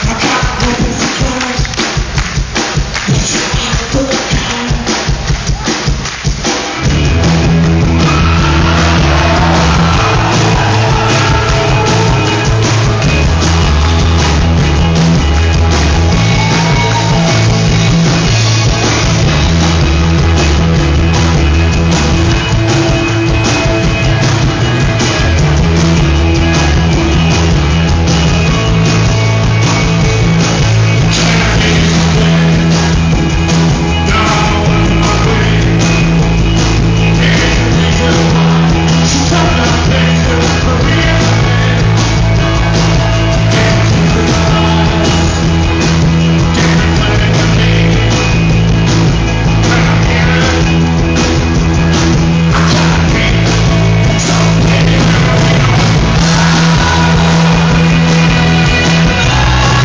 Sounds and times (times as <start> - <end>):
Music: 0.0 - 59.8.